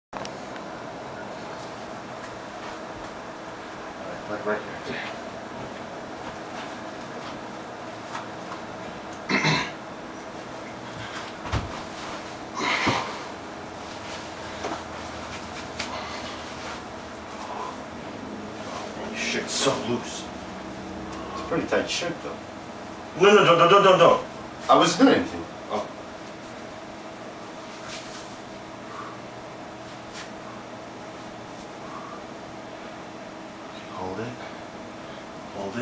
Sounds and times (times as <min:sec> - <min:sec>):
Speech: 0:04.0 - 0:05.2, 0:19.0 - 0:20.3, 0:21.4 - 0:22.4, 0:23.2 - 0:25.9, 0:33.9 - 0:34.5, 0:35.5 - 0:35.8.